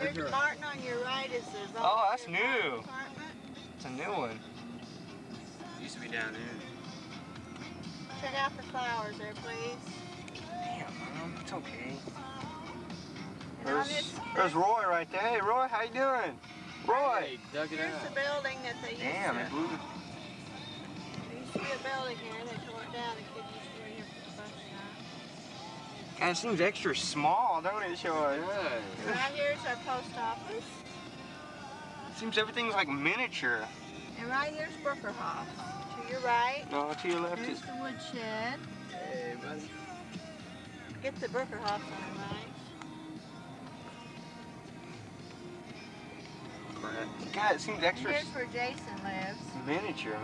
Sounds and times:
Car: 0.0 - 38.9
Music: 0.0 - 50.2.

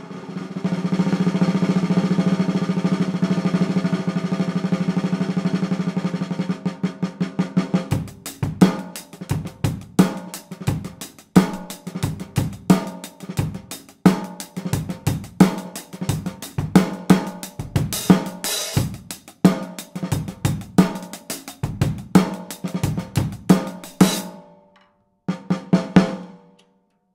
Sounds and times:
Drum roll: 0.0 - 24.6, 25.3 - 26.6
Bass drum: 8.0 - 24.3
Rimshot: 8.0 - 24.4.

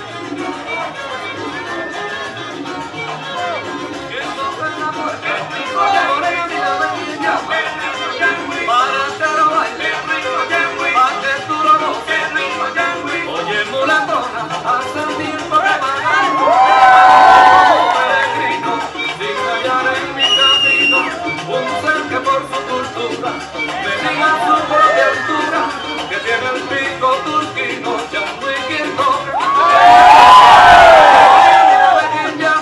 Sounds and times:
Music: 0.0 - 32.6.

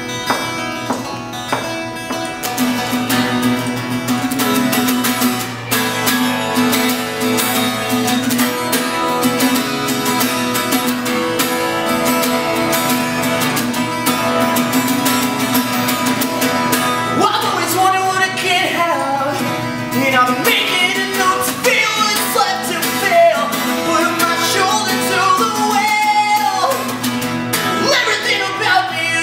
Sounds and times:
Music: 0.0 - 29.2.

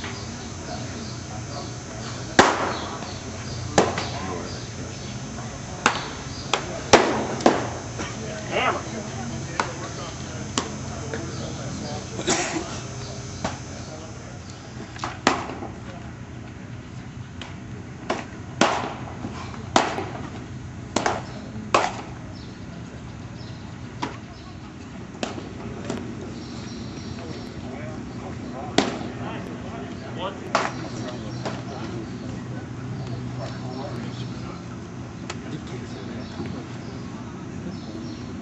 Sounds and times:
Speech: 0.0 - 14.9, 15.7 - 17.1, 21.2 - 38.4.

